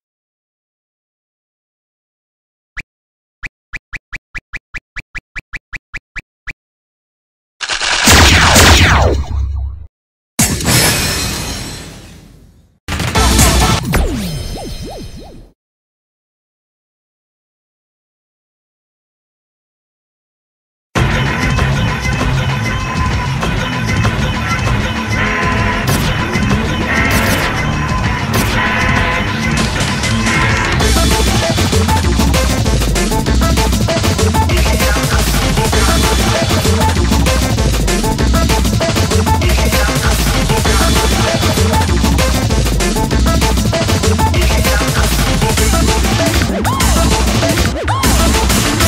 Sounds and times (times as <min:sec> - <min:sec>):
Music: 0:12.9 - 0:14.7, 0:21.0 - 0:48.8.